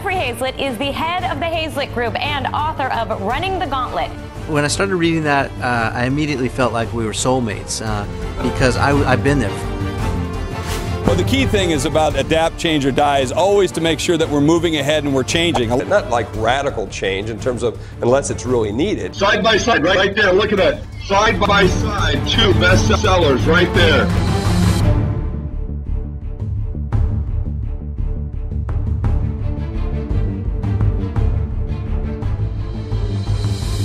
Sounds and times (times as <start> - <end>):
Music: 0.0 - 33.8.